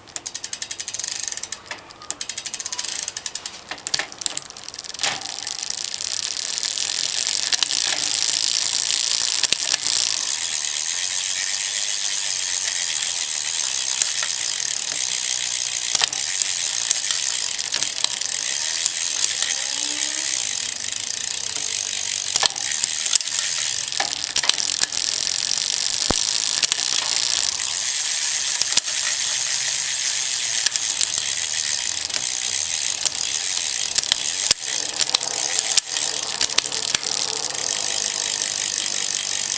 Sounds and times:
Bicycle: 0.0 - 39.5.

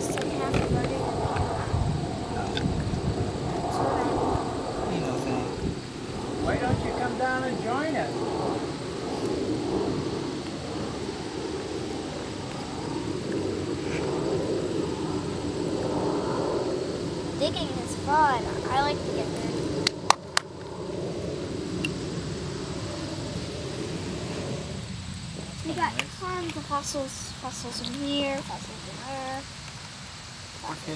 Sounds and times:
Child speech, kid speaking: 0.0 - 1.2, 17.4 - 19.8, 25.6 - 29.5.

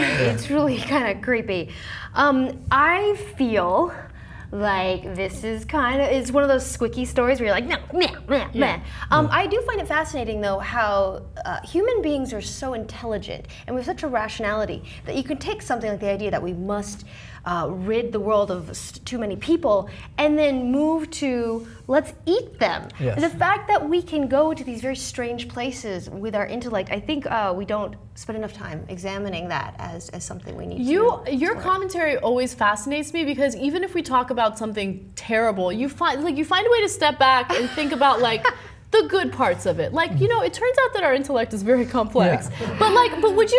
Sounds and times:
Inside, small room: 0.0 - 43.5
Speech: 4.6 - 43.5.

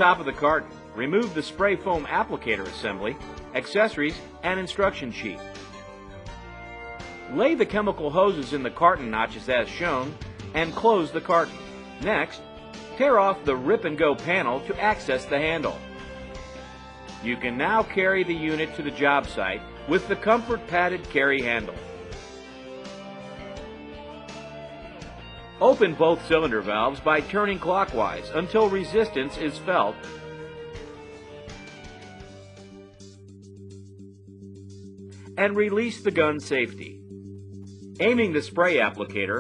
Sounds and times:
Speech: 0.0 - 5.4, 7.3 - 12.4, 13.0 - 15.8, 17.2 - 21.8, 25.6 - 30.0, 35.4 - 37.0, 38.0 - 39.4
Music: 0.0 - 39.4.

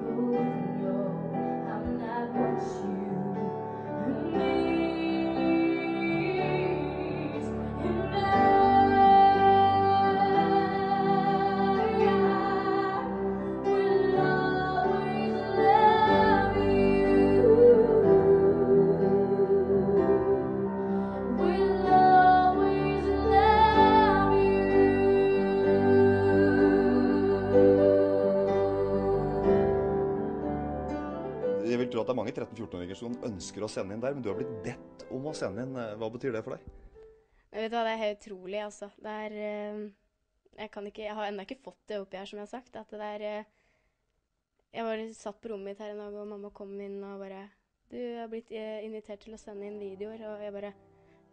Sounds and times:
Female singing: 0.0 - 13.1, 13.7 - 20.6, 21.3 - 29.9
Music: 0.0 - 38.3, 48.5 - 51.3
Speech: 31.6 - 36.7.

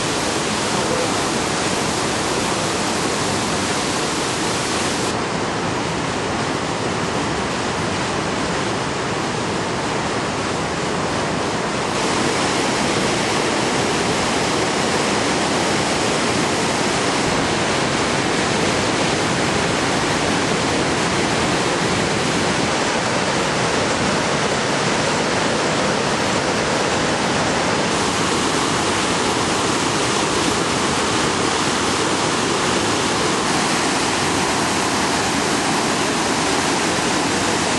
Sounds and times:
Ocean: 0.0 - 37.7
Waterfall: 0.0 - 37.7.

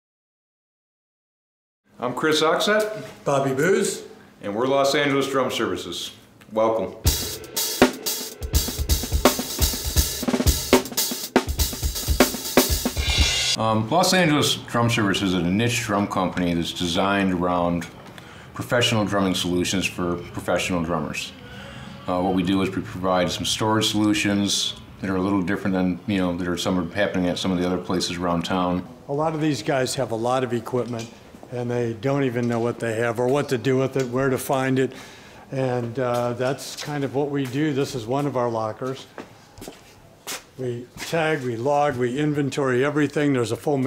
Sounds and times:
Speech: 2.0 - 7.1, 13.6 - 18.0, 18.6 - 21.4, 22.0 - 39.1, 40.6 - 43.8.

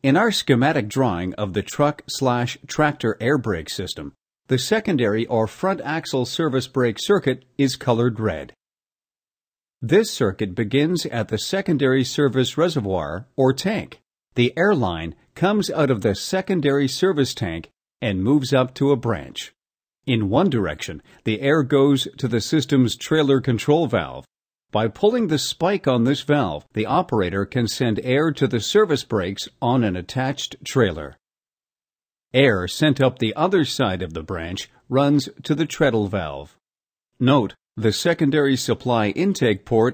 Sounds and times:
Speech: 0.0 - 8.6, 9.8 - 31.2, 32.3 - 36.6, 37.2 - 39.9.

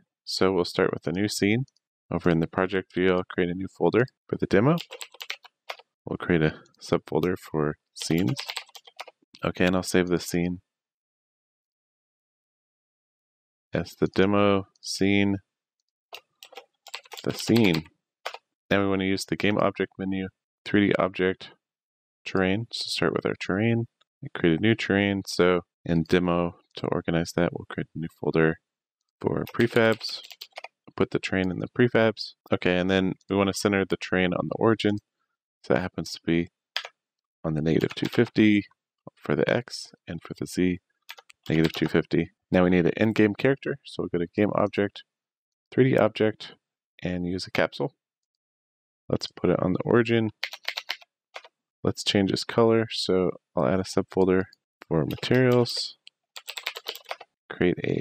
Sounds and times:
Speech: 0.3 - 4.9, 6.1 - 8.6, 9.4 - 10.7, 13.8 - 15.4, 17.2 - 17.9, 18.7 - 21.6, 22.3 - 28.6, 29.2 - 35.0, 35.6 - 36.5, 37.5 - 40.8, 41.4 - 45.1, 45.7 - 48.0, 49.1 - 50.4, 51.9 - 56.1, 57.5 - 58.0.

